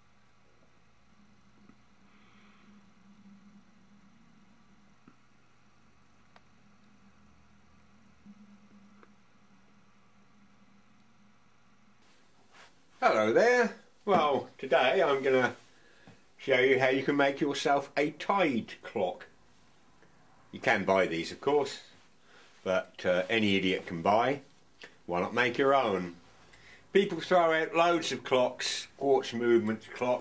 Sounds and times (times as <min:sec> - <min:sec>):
Speech: 0:13.0 - 0:15.6, 0:16.4 - 0:19.4, 0:20.6 - 0:22.0, 0:22.6 - 0:24.5, 0:25.1 - 0:26.2, 0:26.9 - 0:30.2.